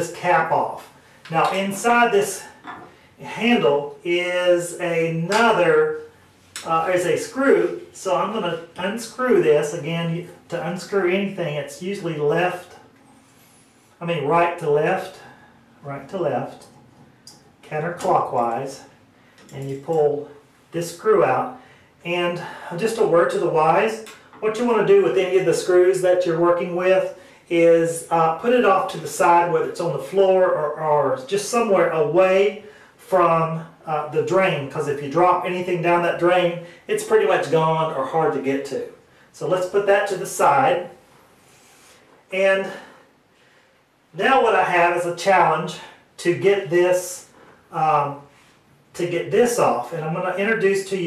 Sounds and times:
Speech: 0.0s - 12.9s, 14.0s - 16.8s, 17.6s - 41.0s, 42.3s - 43.0s, 44.1s - 48.3s, 48.9s - 51.0s.

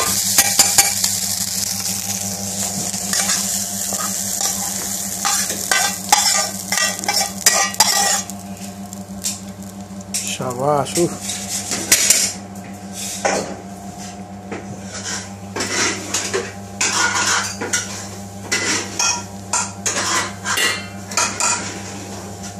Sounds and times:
Frying (food): 0.0s - 22.5s
Speech: 10.2s - 11.2s.

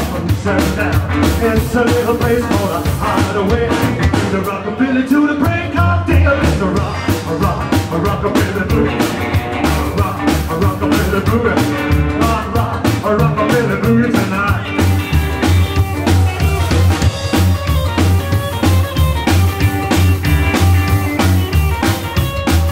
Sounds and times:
Rock and roll: 0.0s - 22.7s.

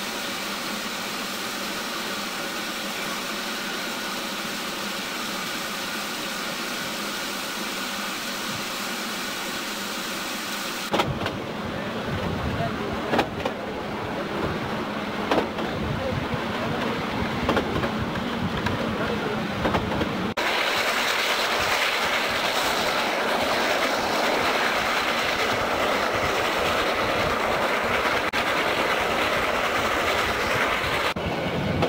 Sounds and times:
Train: 0.0s - 31.8s
Speech: 11.7s - 14.5s, 15.6s - 17.2s, 18.8s - 19.6s.

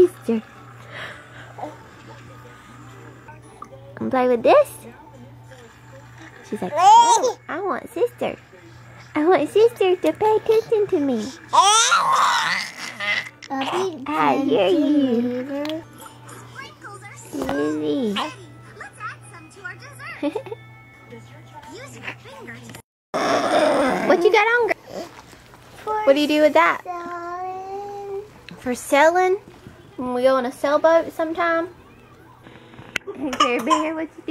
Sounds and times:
Inside, small room: 0.0s - 34.3s
Child speech, kid speaking: 16.5s - 20.2s, 25.8s - 28.3s
Cough: 33.3s - 34.0s.

